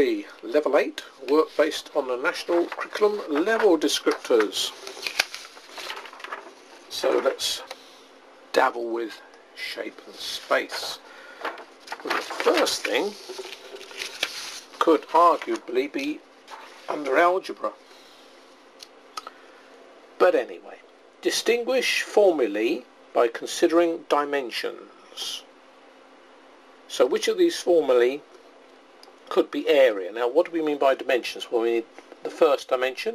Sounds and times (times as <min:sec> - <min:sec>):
Speech: 0:00.0 - 0:04.8, 0:06.9 - 0:07.7, 0:08.5 - 0:11.0, 0:12.1 - 0:13.2, 0:14.8 - 0:16.2, 0:16.9 - 0:17.8, 0:20.2 - 0:25.5, 0:26.9 - 0:28.3, 0:29.3 - 0:33.1
Inside, small room: 0:00.0 - 0:33.1.